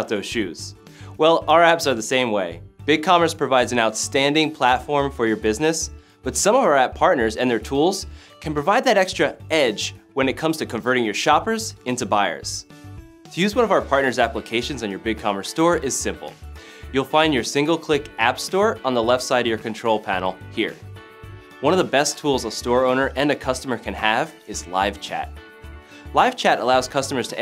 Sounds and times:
Speech: 0.0s - 12.7s, 13.4s - 20.8s, 21.6s - 25.4s, 26.1s - 27.4s
Music: 0.0s - 27.4s.

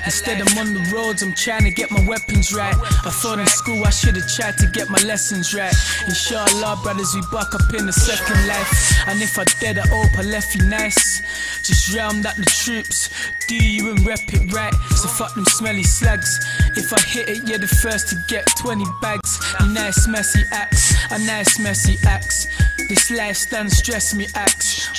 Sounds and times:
Music: 0.0s - 24.9s.

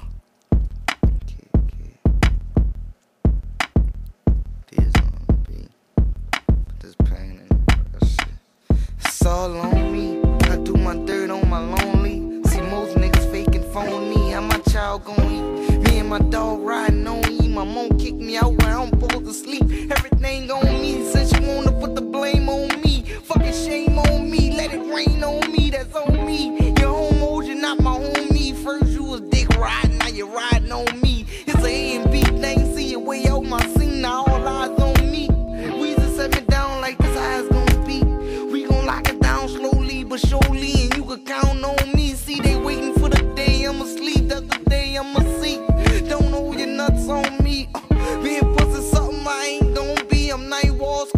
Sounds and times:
Guitar: 9.2s - 51.1s.

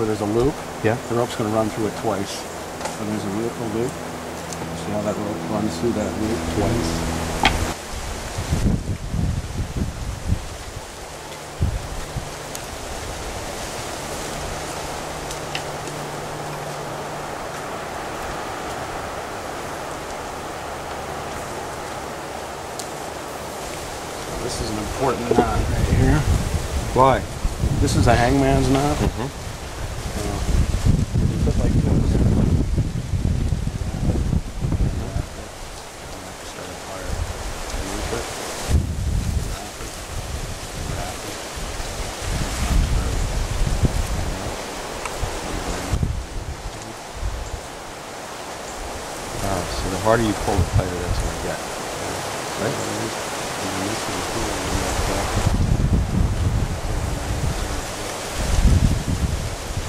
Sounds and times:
Speech: 0.0s - 4.0s, 4.6s - 7.0s, 24.3s - 26.3s, 26.9s - 29.3s, 30.2s - 30.5s, 34.9s - 35.5s, 36.1s - 37.2s, 37.8s - 38.3s, 39.4s - 40.0s, 40.9s - 41.4s, 42.7s - 43.2s, 44.3s - 44.6s, 45.4s - 46.0s, 49.4s - 55.4s, 57.1s - 58.2s
White noise: 0.0s - 59.8s.

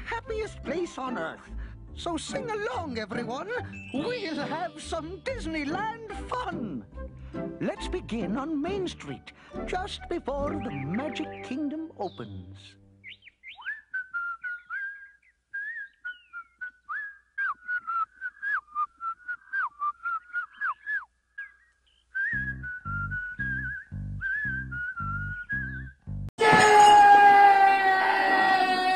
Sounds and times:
Whistle: 3.7s - 4.3s, 13.6s - 25.9s.

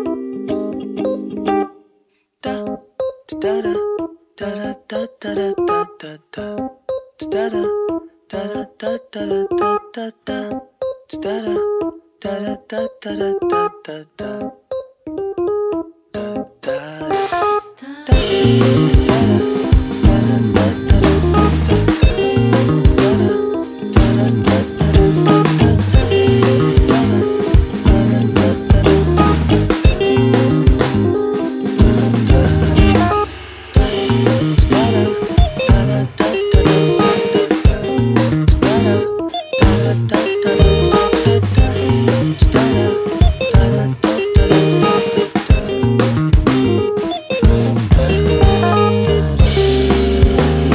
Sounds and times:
Music: 0.0s - 50.7s.

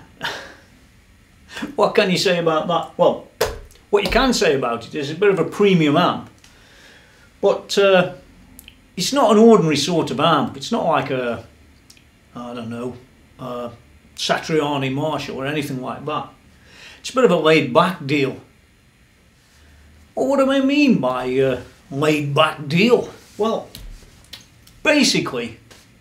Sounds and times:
Speech: 1.6s - 3.3s, 3.9s - 6.3s, 7.4s - 8.2s, 9.0s - 11.5s, 12.3s - 16.4s, 17.0s - 18.5s, 20.2s - 23.8s, 24.8s - 25.6s.

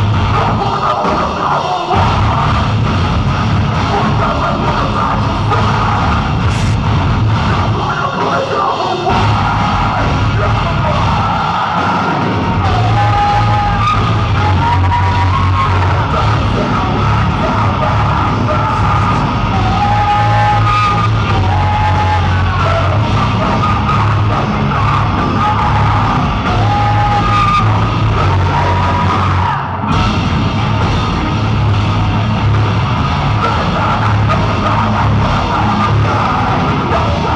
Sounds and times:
Music: 0.0s - 37.3s.

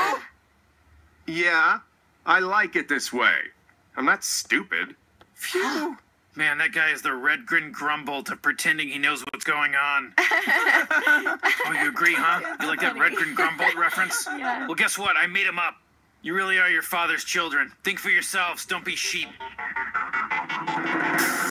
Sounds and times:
Speech: 1.3s - 10.2s, 11.1s - 19.3s
Music: 18.8s - 21.5s.

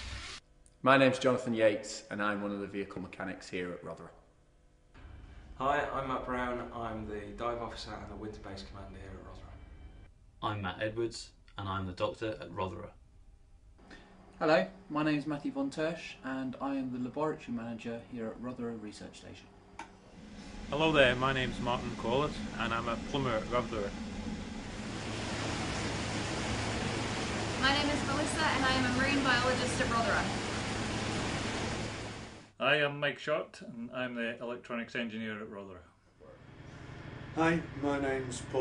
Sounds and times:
Speech: 0.8s - 4.2s, 5.6s - 9.6s, 10.4s - 13.0s, 14.4s - 19.4s, 20.8s - 23.9s, 32.6s - 35.9s, 37.4s - 38.6s.

